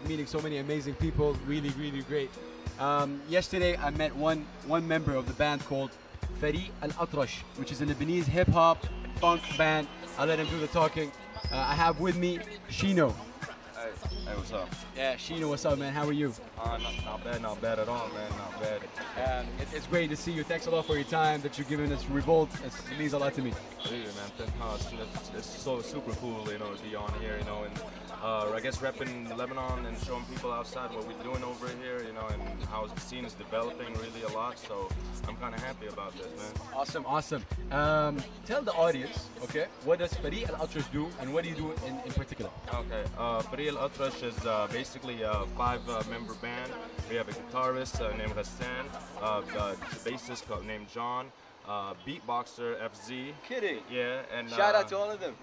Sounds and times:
Music: 0.0 - 51.0
Speech: 0.0 - 55.4.

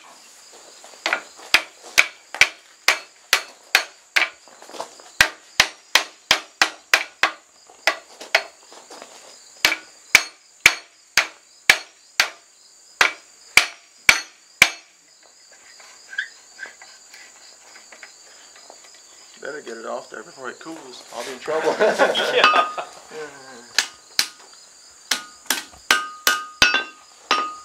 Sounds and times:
Outside, rural or natural: 0.0 - 27.6.

